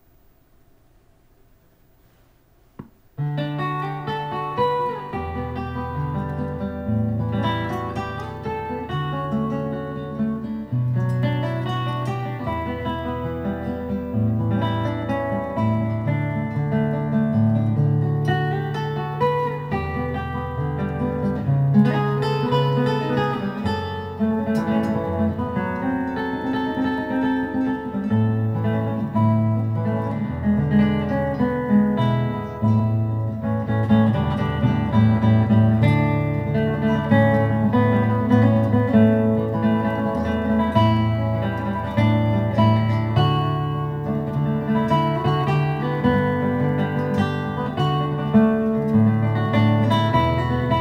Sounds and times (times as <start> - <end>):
Acoustic guitar: 0.0 - 50.8
Strum: 1.4 - 50.8.